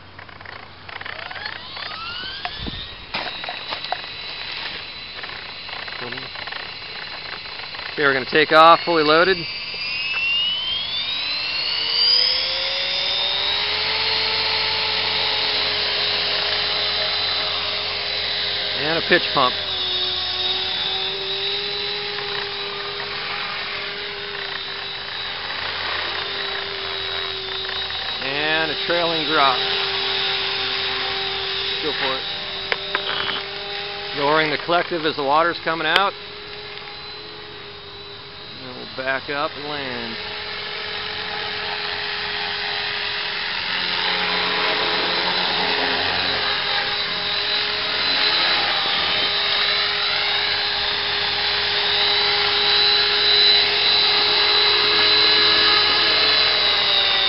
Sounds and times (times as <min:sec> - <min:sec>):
Helicopter: 0:00.0 - 0:57.2
Speech: 0:08.0 - 0:09.4, 0:34.2 - 0:36.1, 0:38.6 - 0:40.2.